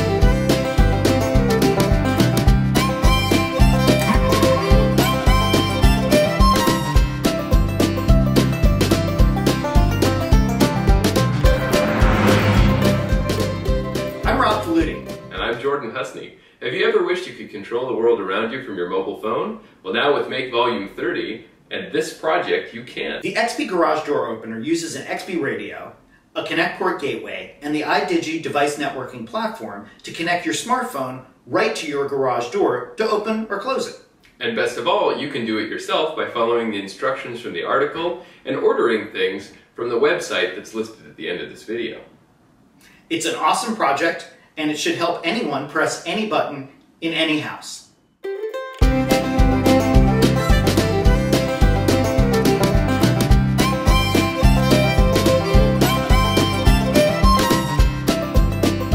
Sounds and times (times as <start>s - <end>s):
Speech: 14.2s - 42.1s, 43.1s - 47.9s.